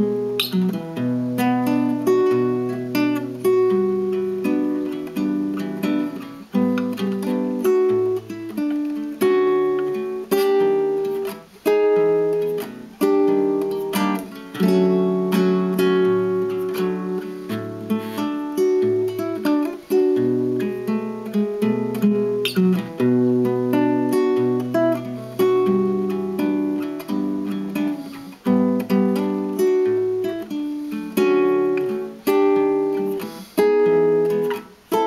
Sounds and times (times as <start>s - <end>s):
Guitar: 0.0s - 35.0s.